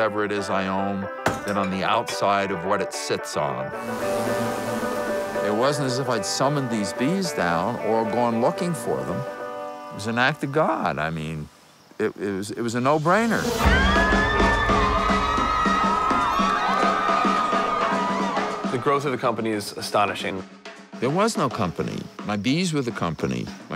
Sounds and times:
Speech: 0:00.0 - 0:03.6, 0:05.4 - 0:09.2, 0:10.0 - 0:13.6, 0:18.7 - 0:23.7
Music: 0:00.0 - 0:11.0, 0:13.0 - 0:23.7.

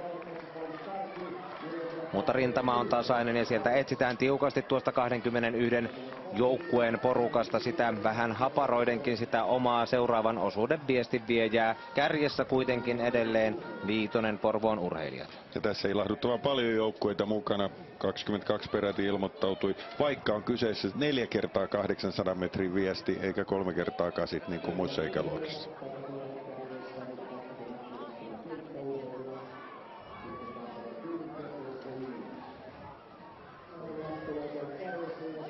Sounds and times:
Speech: 0:00.0 - 0:29.6, 0:33.7 - 0:35.5
Outside, urban or manmade: 0:00.0 - 0:35.5.

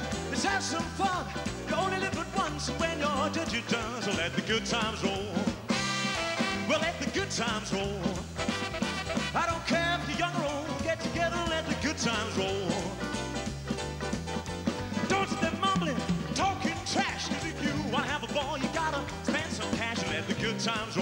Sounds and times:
Singing: 0:00.0 - 0:05.6, 0:09.4 - 0:13.0, 0:15.0 - 0:21.0
Blues: 0:00.0 - 0:21.0
Song: 0:00.0 - 0:21.0.

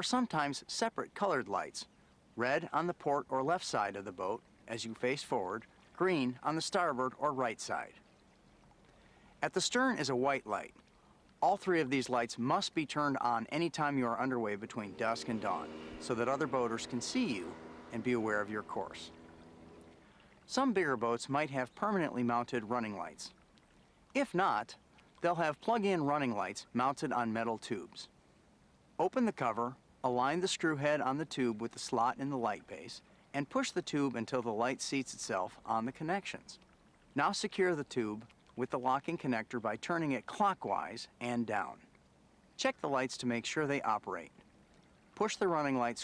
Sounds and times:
Speech: 0:00.0 - 0:08.0, 0:09.4 - 0:10.7, 0:11.4 - 0:19.1, 0:20.5 - 0:23.3, 0:24.2 - 0:28.1, 0:29.0 - 0:36.6, 0:37.2 - 0:41.8, 0:42.6 - 0:44.3, 0:45.2 - 0:46.0
Motorboat, speedboat: 0:13.6 - 0:20.8.

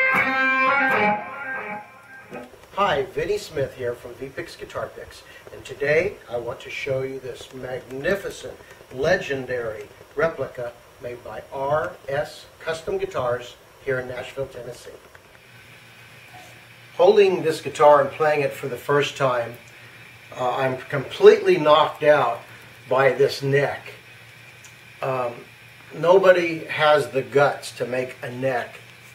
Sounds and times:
Speech: 0:02.8 - 0:15.0, 0:17.0 - 0:19.6, 0:20.3 - 0:24.0, 0:25.0 - 0:28.8.

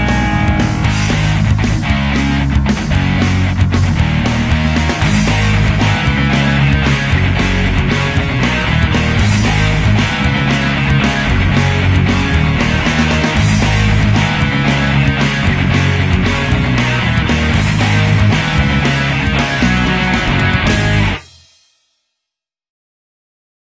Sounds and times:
Music: 0:00.0 - 0:22.5.

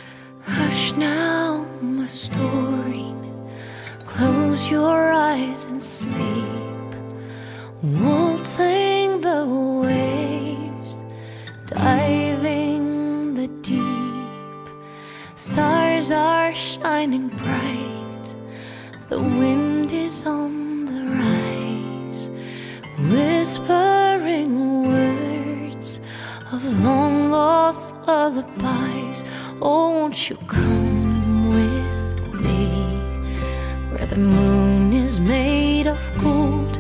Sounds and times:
Lullaby: 0:00.0 - 0:36.8.

